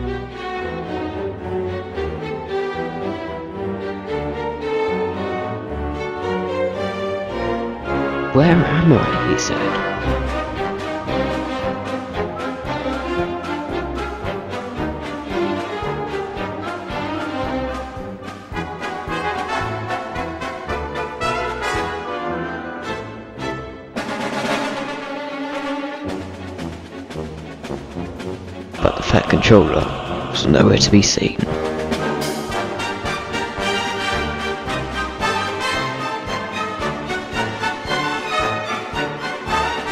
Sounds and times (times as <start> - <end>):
Music: 0.0 - 39.9
Speech: 8.3 - 10.0, 28.8 - 31.6.